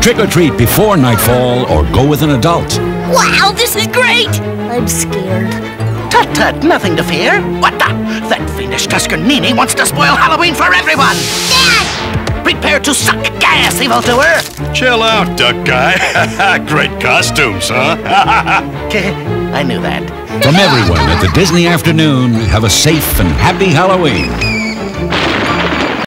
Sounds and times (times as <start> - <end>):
Music: 0.0 - 26.0.